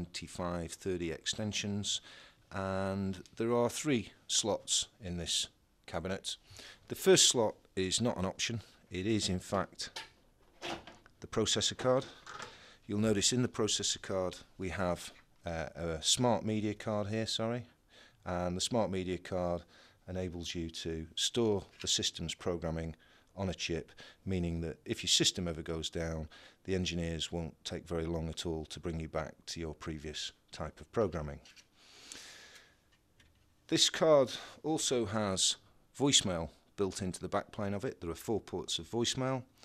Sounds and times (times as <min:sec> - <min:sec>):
Speech: 0:00.0 - 0:10.0, 0:11.2 - 0:12.2, 0:12.9 - 0:31.5, 0:33.7 - 0:39.5.